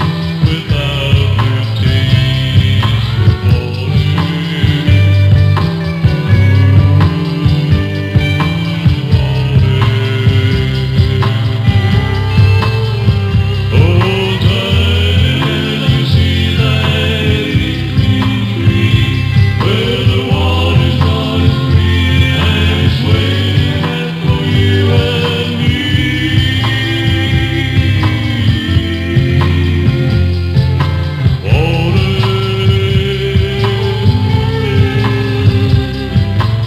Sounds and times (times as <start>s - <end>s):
Music: 0.0s - 36.6s.